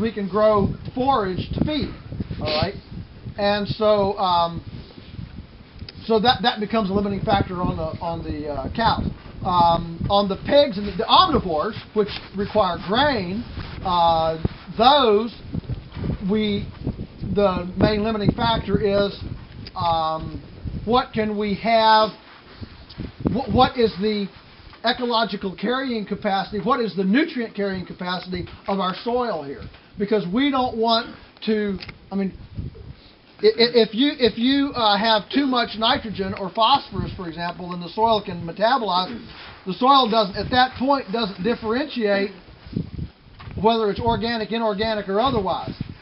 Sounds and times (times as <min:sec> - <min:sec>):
Speech: 0:00.0 - 0:02.8, 0:03.4 - 0:04.7, 0:05.9 - 0:15.4, 0:16.2 - 0:22.2, 0:23.3 - 0:32.4, 0:33.4 - 0:42.4, 0:43.6 - 0:45.8.